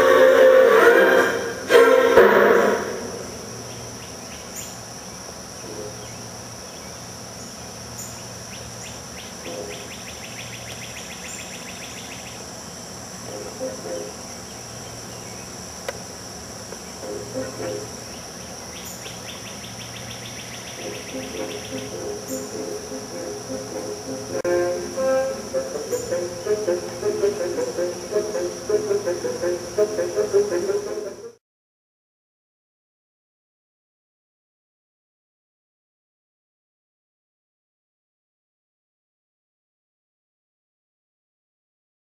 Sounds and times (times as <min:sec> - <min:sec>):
Music: 0:00.0 - 0:03.4, 0:13.3 - 0:14.2, 0:17.0 - 0:18.1, 0:20.8 - 0:31.4
Outside, rural or natural: 0:00.0 - 0:31.4.